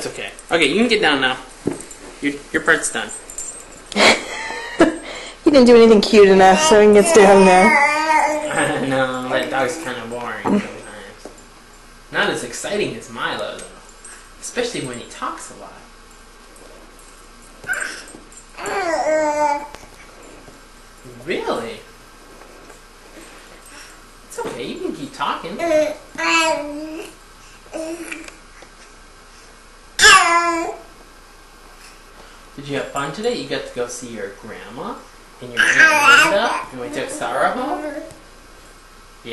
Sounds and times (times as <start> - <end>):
Inside, small room: 0.0 - 39.3
Babbling: 6.5 - 10.1, 17.7 - 19.7, 25.6 - 28.4, 30.0 - 30.9, 35.6 - 38.2.